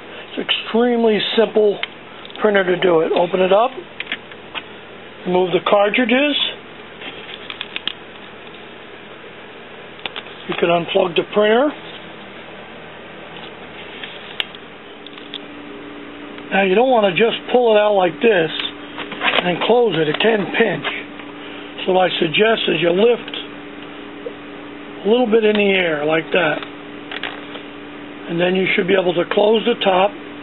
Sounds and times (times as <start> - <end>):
Speech: 0.4 - 3.8, 5.2 - 6.6, 10.5 - 11.8, 16.5 - 18.8, 19.4 - 21.1, 21.8 - 23.5, 25.0 - 26.6, 28.3 - 30.2.